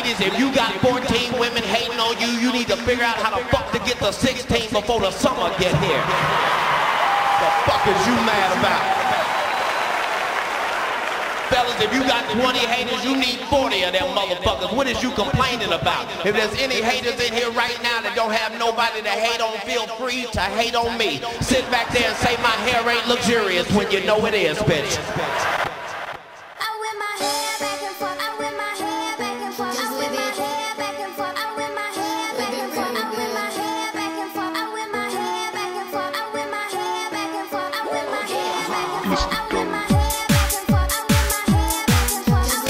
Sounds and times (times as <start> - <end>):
Speech: 0.0 - 6.0, 11.5 - 25.4.